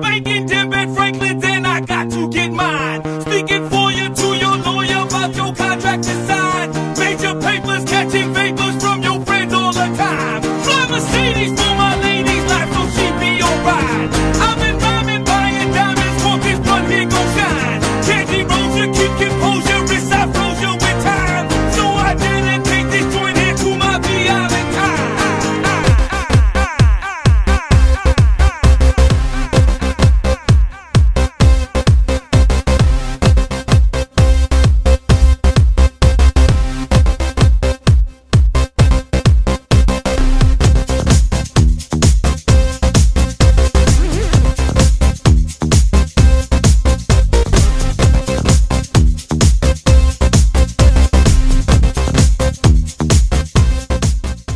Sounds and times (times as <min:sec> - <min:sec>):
Music: 0:00.0 - 0:54.5.